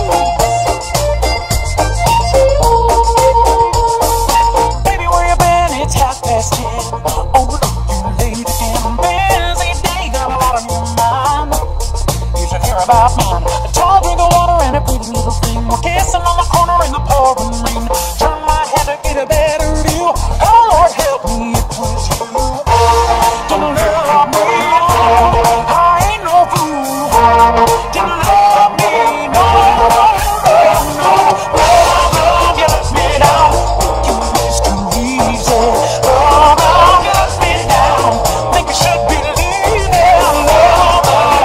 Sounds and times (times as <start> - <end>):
Music: 0.0 - 41.4.